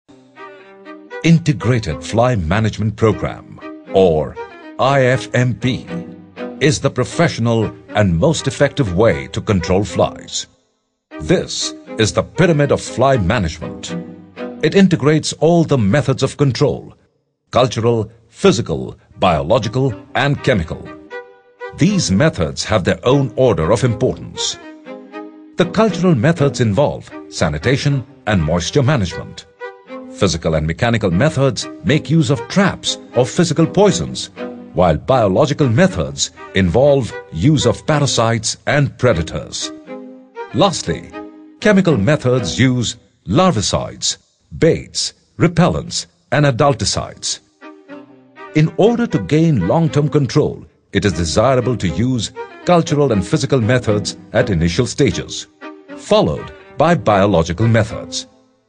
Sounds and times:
Music: 0.0s - 58.6s
Speech: 1.2s - 6.0s, 6.6s - 10.5s, 11.2s - 14.0s, 14.6s - 17.0s, 17.6s - 21.0s, 21.8s - 24.6s, 25.6s - 29.5s, 30.2s - 39.7s, 40.5s - 47.4s, 48.6s - 58.3s.

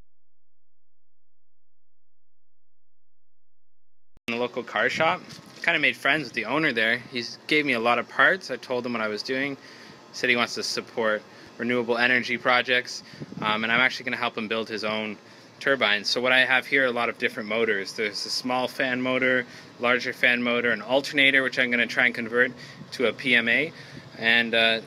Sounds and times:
Speech: 4.3s - 9.6s, 10.2s - 24.8s.

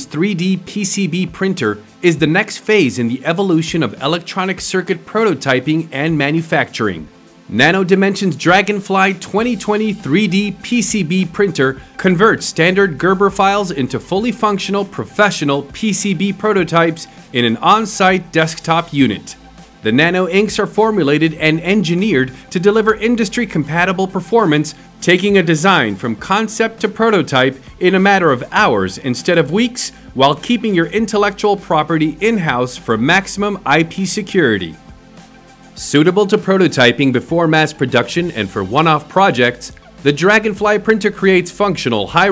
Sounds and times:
Speech: 0.0s - 34.8s, 35.8s - 42.3s.

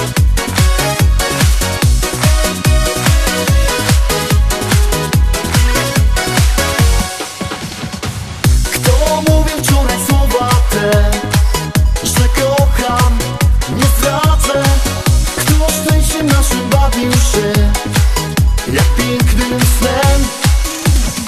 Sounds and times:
Exciting music: 0.0s - 21.2s.

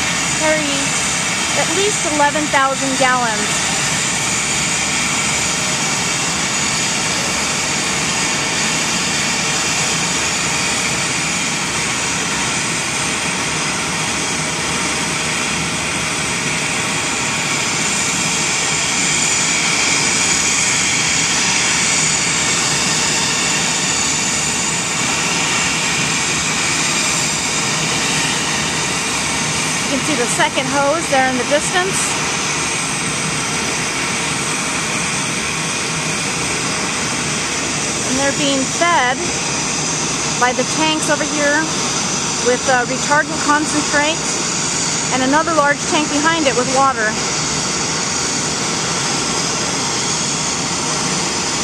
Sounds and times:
Fixed-wing aircraft, airplane: 0.0s - 51.6s
Speech: 0.4s - 1.0s, 1.6s - 3.5s, 29.9s - 32.2s, 38.1s - 39.3s, 40.4s - 41.7s, 42.4s - 44.2s, 45.1s - 47.2s.

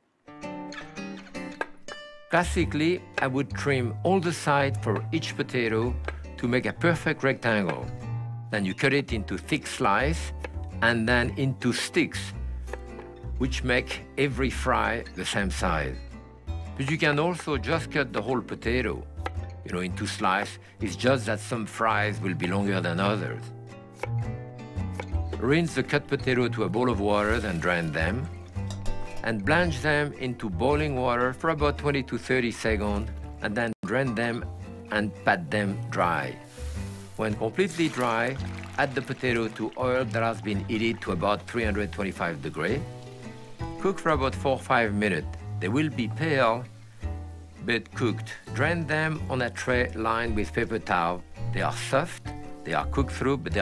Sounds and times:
Music: 0.0s - 53.6s
Speech: 2.3s - 7.9s, 8.5s - 12.4s, 13.4s - 16.0s, 16.8s - 19.1s, 19.7s - 23.5s, 25.4s - 28.3s, 29.2s - 36.4s, 37.2s - 42.9s, 43.8s - 46.7s, 47.6s - 53.6s.

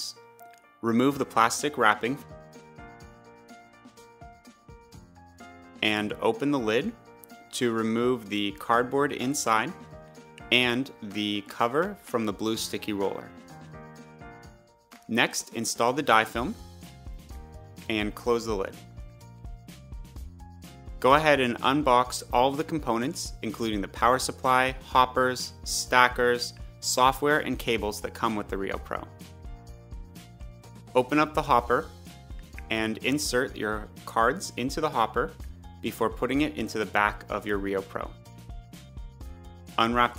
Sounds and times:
Music: 0.0s - 40.1s
Speech: 0.8s - 2.2s, 5.8s - 9.8s, 10.4s - 13.3s, 15.1s - 16.6s, 17.9s - 18.8s, 21.0s - 29.1s, 31.0s - 31.9s, 32.6s - 38.2s, 39.8s - 40.1s.

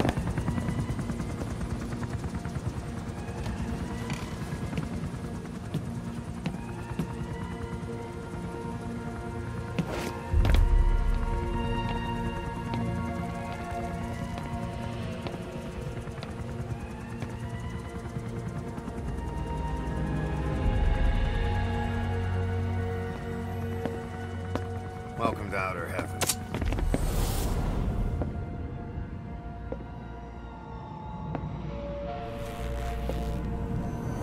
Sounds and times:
Music: 0.0s - 34.2s.

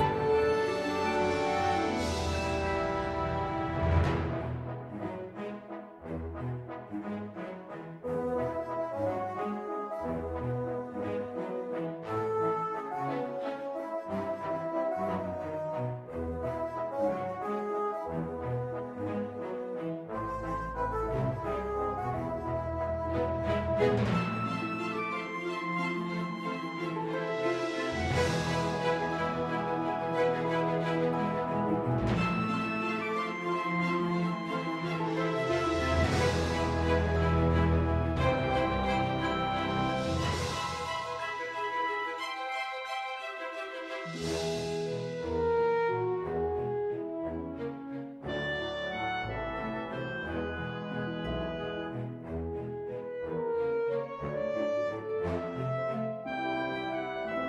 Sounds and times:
Background music: 0.0s - 57.4s
Video game music: 0.0s - 57.4s.

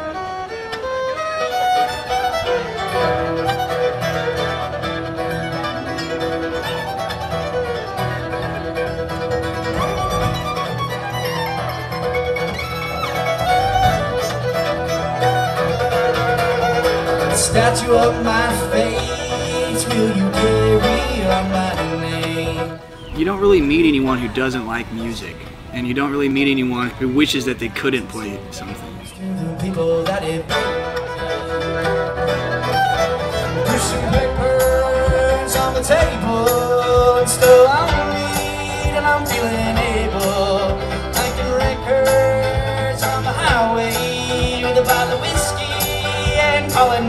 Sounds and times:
Musical instrument: 0.0s - 24.8s, 27.8s - 47.0s
Speech: 23.2s - 29.1s.

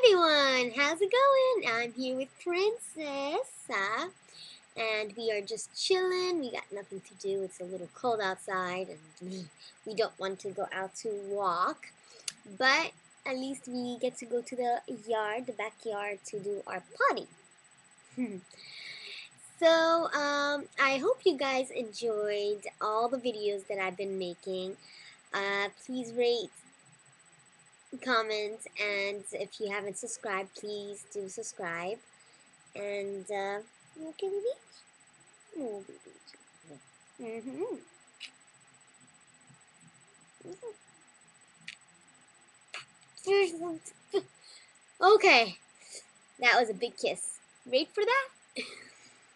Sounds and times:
Speech: 0.0s - 4.1s, 4.8s - 17.3s, 19.6s - 24.8s, 25.4s - 26.6s, 28.0s - 32.0s, 32.8s - 34.6s, 35.6s - 36.3s, 37.2s - 37.8s, 43.2s - 44.3s, 45.0s - 45.6s, 46.4s - 48.7s.

